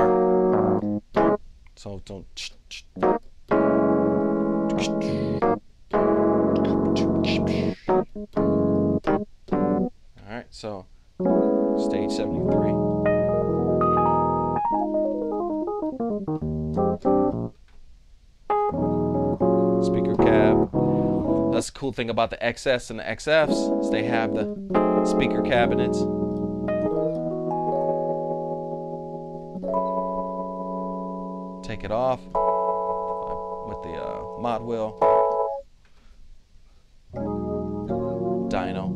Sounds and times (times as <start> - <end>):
Electric piano: 0.0 - 1.4, 3.0 - 9.9, 11.2 - 17.6, 18.5 - 21.7, 23.4 - 35.7, 37.1 - 38.9
Speech: 1.8 - 2.9, 4.7 - 5.3, 6.6 - 7.9, 10.2 - 10.9, 11.8 - 12.8, 19.8 - 20.7, 21.5 - 24.5, 25.1 - 26.1, 31.6 - 32.3, 33.2 - 35.0, 38.5 - 38.9.